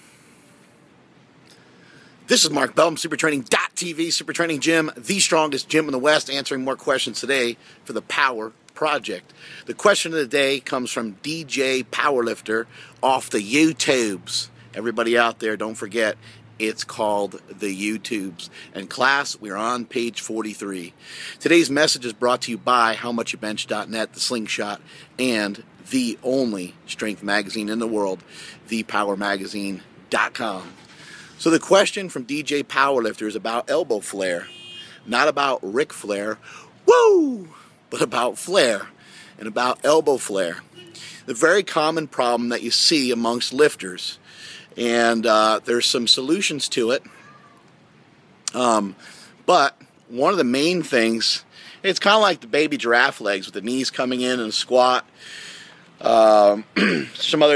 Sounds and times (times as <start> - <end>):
Speech: 2.3 - 30.7, 31.4 - 34.5, 35.1 - 36.4, 37.0 - 40.6, 41.3 - 44.2, 44.8 - 47.1, 48.5 - 55.1, 56.0 - 57.5.